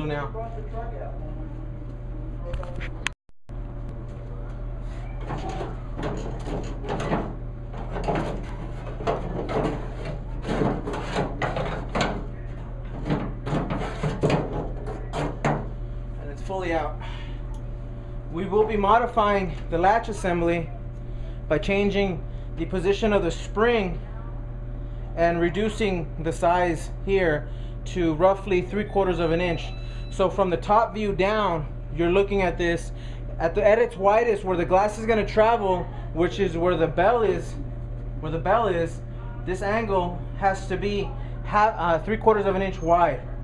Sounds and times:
Speech: 0.0s - 1.8s, 16.2s - 17.0s, 18.3s - 20.8s, 21.5s - 24.5s, 25.1s - 37.6s, 38.2s - 43.3s.

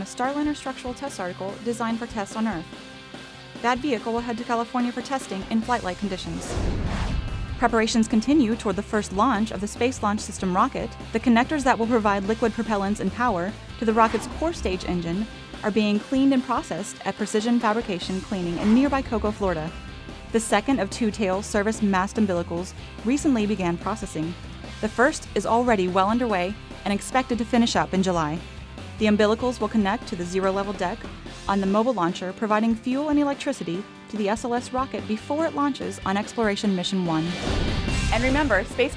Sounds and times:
Speech: 0.0s - 2.7s, 3.6s - 6.5s, 7.6s - 19.7s, 20.4s - 28.4s, 29.0s - 37.4s, 38.1s - 38.9s
Music: 0.0s - 38.9s.

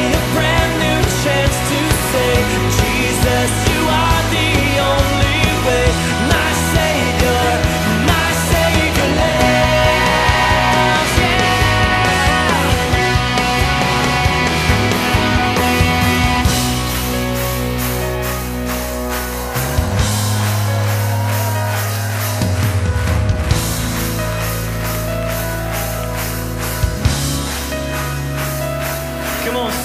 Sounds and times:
Music: 0.0s - 29.8s.

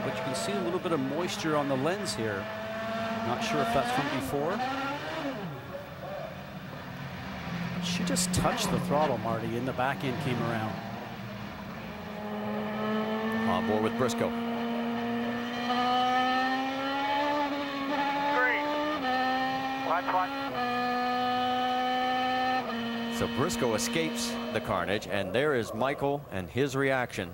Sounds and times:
Race car, auto racing: 0.0s - 26.1s.

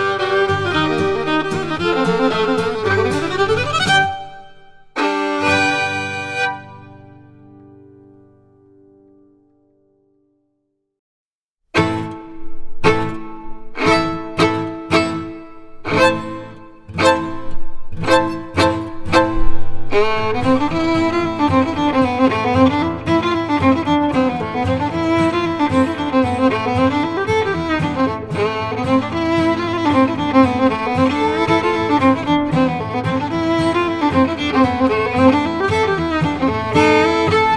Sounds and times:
Violin, fiddle: 0.0s - 7.5s, 11.8s - 37.5s.

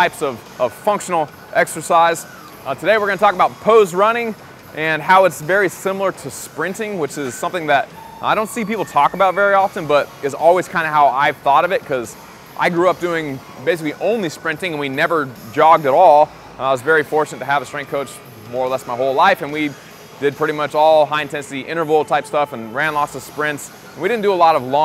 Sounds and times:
Music: 0.0s - 24.8s
Speech: 0.0s - 24.8s.

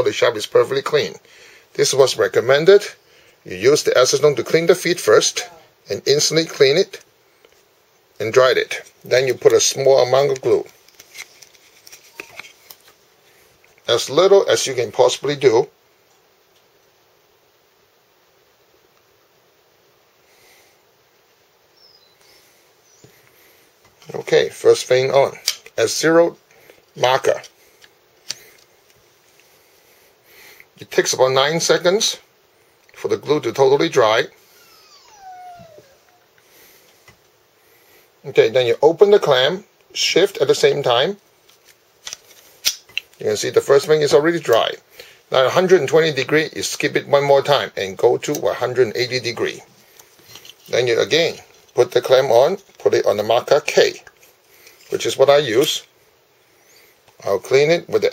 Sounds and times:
Speech: 0.0s - 1.2s, 1.8s - 7.1s, 8.2s - 10.7s, 13.9s - 15.8s, 24.0s - 26.4s, 27.0s - 27.5s, 30.8s - 32.3s, 33.0s - 34.4s, 38.2s - 41.2s, 43.2s - 49.7s, 50.7s - 54.1s, 54.9s - 55.9s, 57.2s - 58.1s.

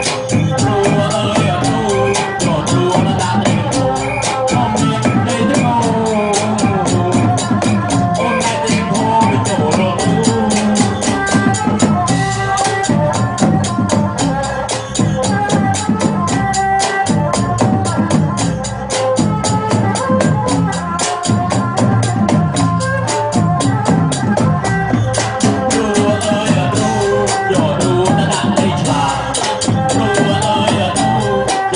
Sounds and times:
Folk music: 0.0s - 31.7s.

